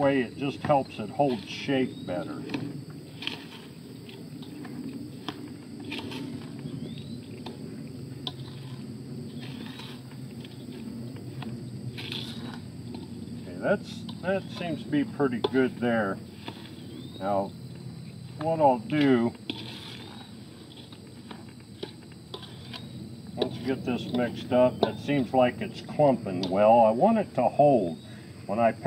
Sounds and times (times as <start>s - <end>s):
Speech: 0.0s - 2.5s, 13.5s - 16.2s, 17.2s - 17.5s, 18.4s - 19.4s, 23.4s - 28.8s.